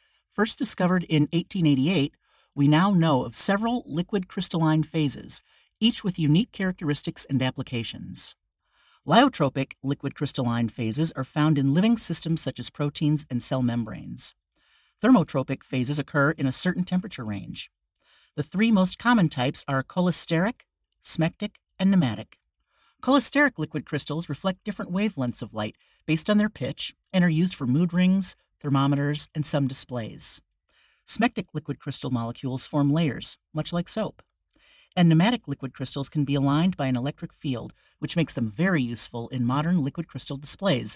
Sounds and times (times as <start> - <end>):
Speech: 0.4 - 8.4, 9.1 - 14.4, 15.0 - 17.7, 18.4 - 22.4, 23.0 - 30.4, 31.1 - 34.2, 35.0 - 40.9.